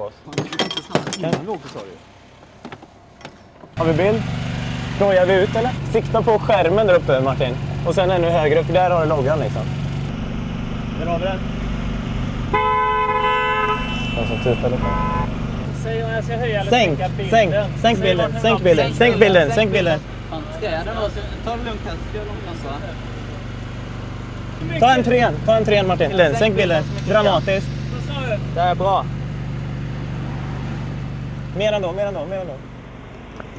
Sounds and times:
Speech: 3.8s - 4.2s, 5.0s - 9.7s, 15.8s - 23.0s, 24.6s - 29.1s, 31.6s - 32.6s.

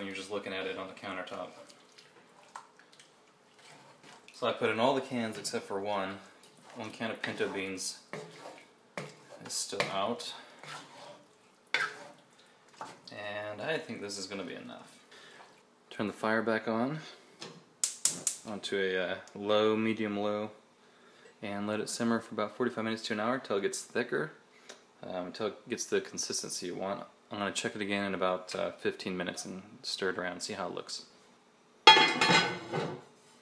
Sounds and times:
Speech: 0.0s - 1.7s, 4.4s - 8.1s, 9.4s - 10.5s, 13.1s - 15.0s, 15.9s - 17.2s, 18.5s - 20.6s, 21.4s - 24.4s, 25.0s - 31.1s.

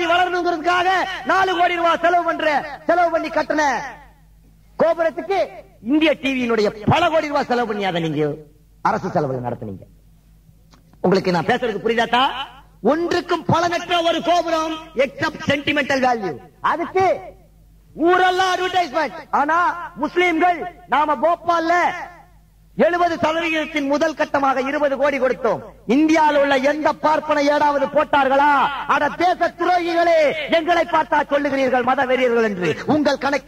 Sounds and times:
Male speech, man speaking: 0.0s - 4.2s, 4.8s - 9.9s, 11.0s - 22.2s, 22.8s - 33.4s
Narration, monologue: 0.0s - 33.4s.

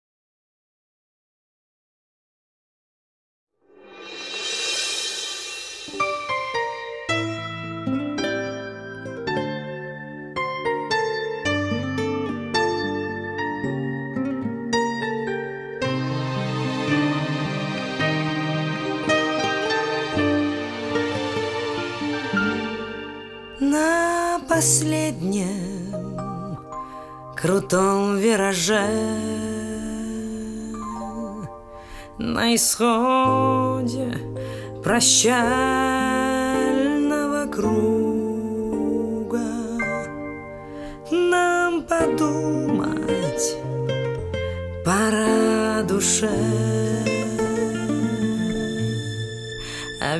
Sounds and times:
Music: 3.6s - 50.1s.

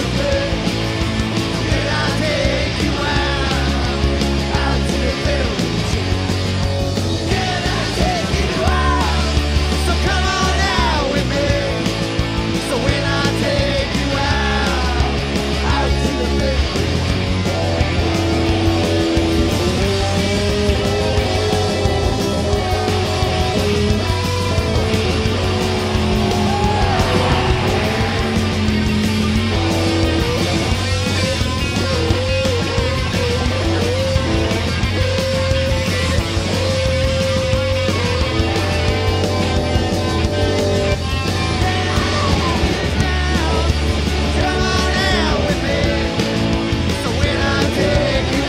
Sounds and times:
Music: 0.0s - 48.4s.

